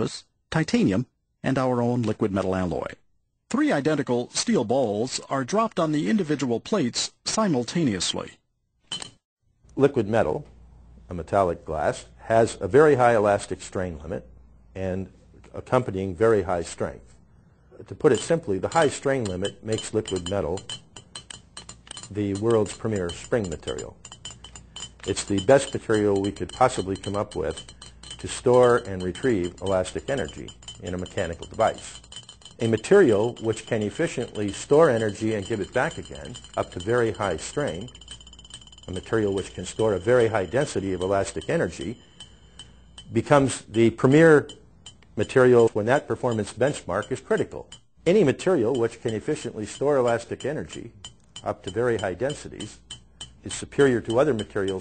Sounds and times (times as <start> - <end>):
Speech: 0.0 - 8.4, 9.8 - 10.5, 11.1 - 17.1, 17.8 - 20.7, 22.1 - 24.0, 25.0 - 27.6, 28.2 - 32.0, 32.6 - 37.9, 38.9 - 42.0, 43.1 - 44.6, 45.2 - 52.8, 53.4 - 54.8.